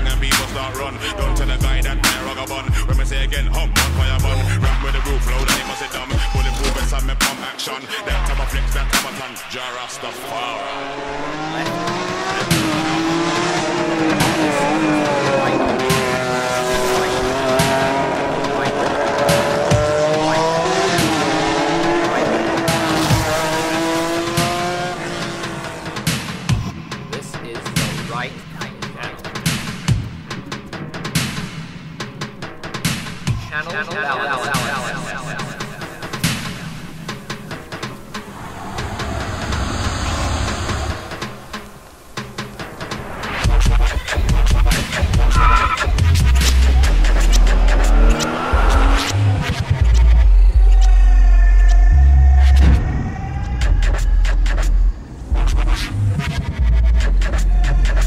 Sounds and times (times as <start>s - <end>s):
Dubstep: 0.0s - 31.6s, 32.8s - 58.0s
Car: 9.8s - 26.6s, 44.5s - 58.0s.